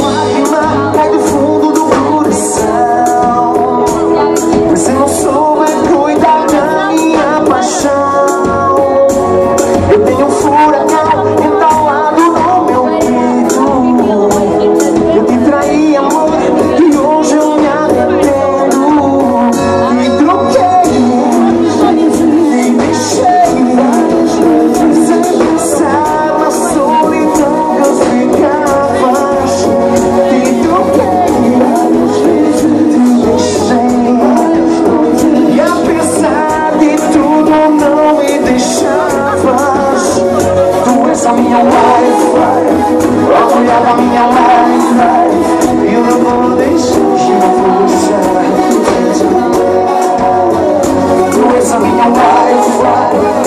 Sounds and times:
Happy music: 0.0 - 53.4
Speech: 0.0 - 53.4.

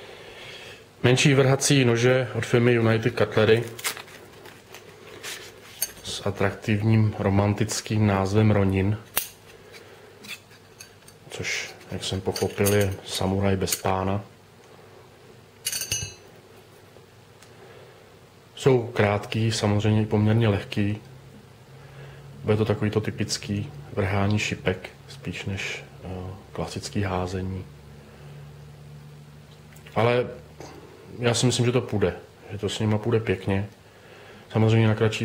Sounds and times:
Inside, small room: 0.0 - 35.2
Speech: 1.0 - 3.8, 6.0 - 9.1, 11.3 - 14.3, 18.6 - 21.1, 22.4 - 27.7, 29.9 - 33.8, 34.5 - 35.2
Tools: 9.1 - 11.2, 15.6 - 16.2.

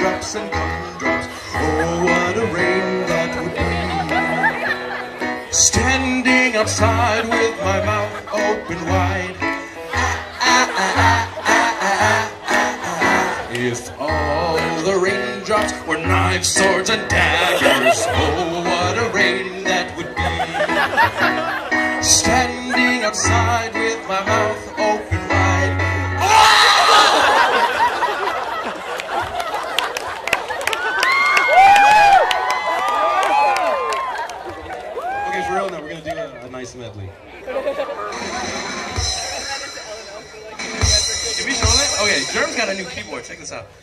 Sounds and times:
Music: 0.0 - 27.6, 38.1 - 43.8.

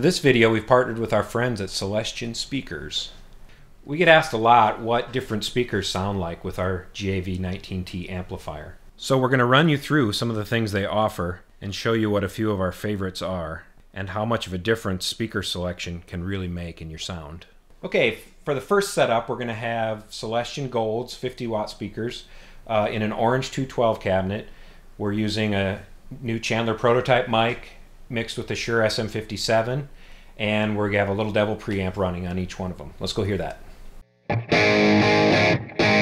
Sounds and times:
Speech: 0.0 - 3.2, 3.8 - 33.6.

